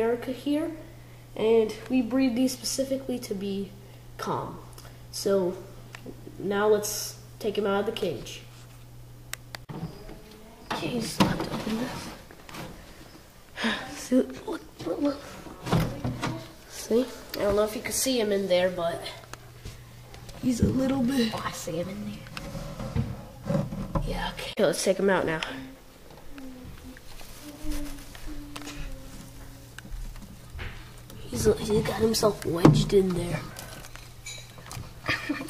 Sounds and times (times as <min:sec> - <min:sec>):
Speech: 0:00.0 - 0:05.7, 0:06.4 - 0:08.5, 0:10.6 - 0:12.1, 0:13.6 - 0:19.2, 0:20.4 - 0:22.3, 0:24.0 - 0:25.8, 0:31.2 - 0:33.6
Inside, small room: 0:00.0 - 0:35.4.